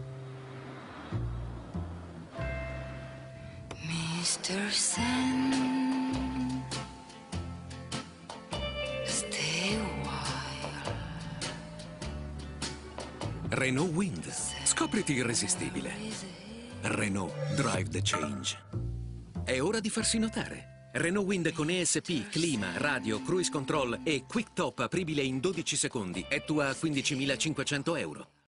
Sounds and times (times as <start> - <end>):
Music: 0.0 - 28.4
Speech: 16.8 - 18.6, 19.5 - 28.4.